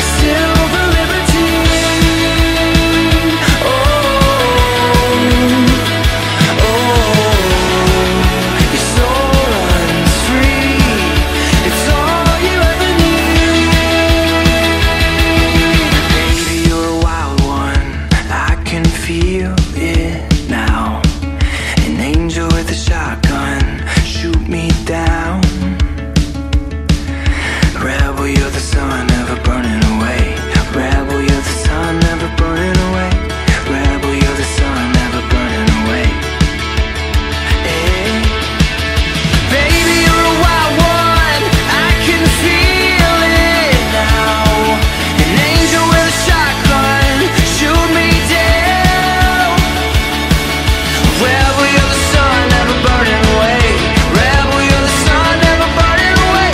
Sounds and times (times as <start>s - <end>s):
Independent music: 0.0s - 56.5s.